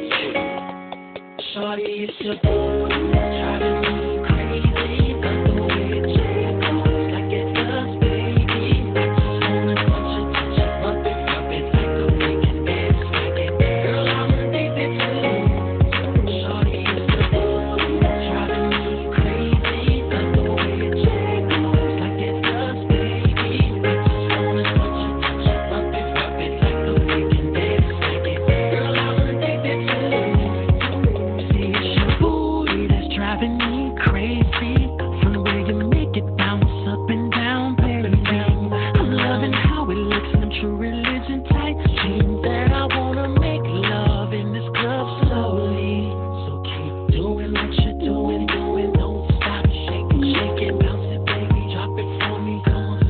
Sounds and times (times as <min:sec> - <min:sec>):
Music: 0:00.0 - 0:53.0.